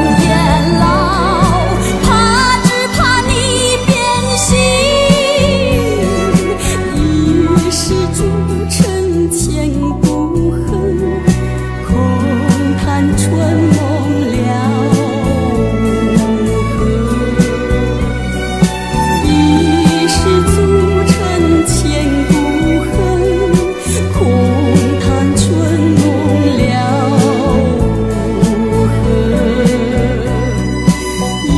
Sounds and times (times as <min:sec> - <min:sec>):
Music: 0:00.0 - 0:31.5.